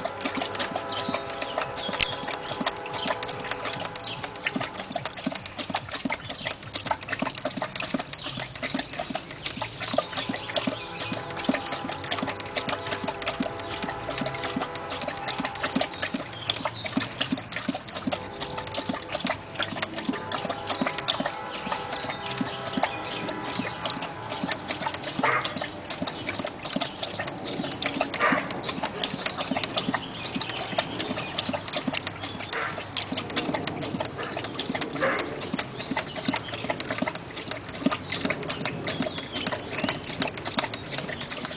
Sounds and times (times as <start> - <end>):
Bow-wow: 25.2 - 25.6, 28.2 - 28.5, 32.6 - 32.8, 35.0 - 35.4.